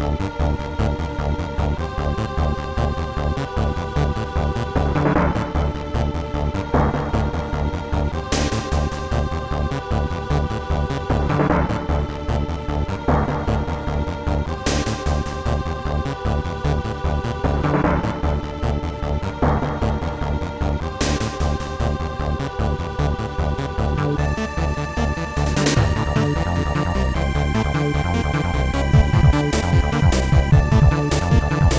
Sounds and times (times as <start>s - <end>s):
Music: 0.0s - 31.7s.